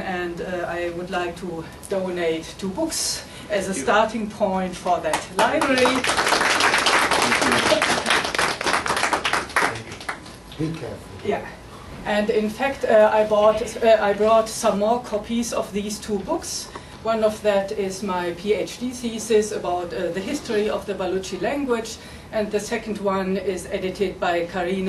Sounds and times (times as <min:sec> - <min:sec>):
Female speech, woman speaking: 0:00.0 - 0:06.2, 0:11.2 - 0:24.8.